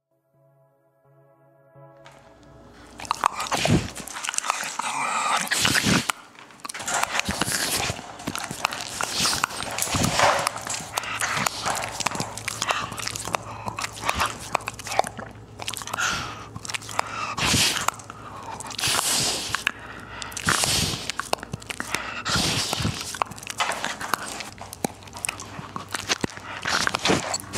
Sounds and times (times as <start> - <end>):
Inside, small room: 0.0 - 27.5
Dog: 2.9 - 27.5.